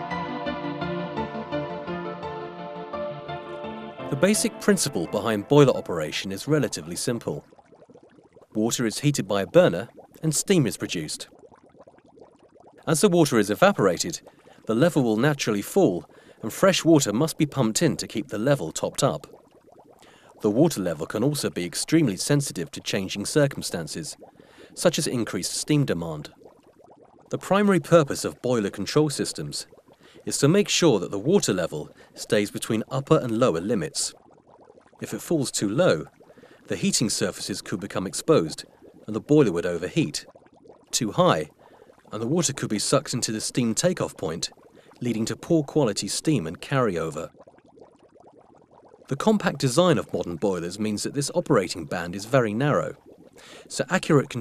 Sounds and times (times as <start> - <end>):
Speech: 4.1 - 7.4, 8.6 - 11.3, 12.9 - 19.3, 20.4 - 24.2, 24.8 - 26.3, 27.4 - 29.7, 30.3 - 34.2, 35.0 - 36.1, 36.7 - 40.3, 41.0 - 41.5, 42.1 - 47.3, 49.1 - 53.0, 53.7 - 54.4.